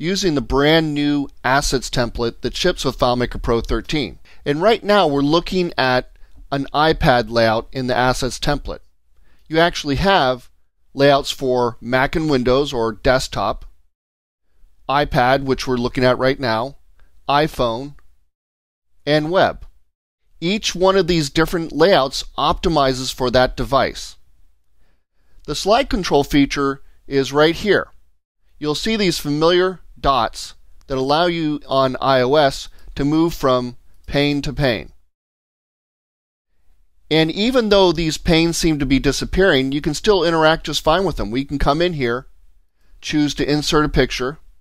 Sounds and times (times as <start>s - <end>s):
Speech: 0.0s - 8.8s, 9.5s - 13.8s, 14.9s - 18.0s, 19.0s - 19.8s, 20.4s - 24.2s, 25.5s - 28.0s, 28.6s - 35.0s, 37.1s - 42.3s, 43.0s - 44.5s.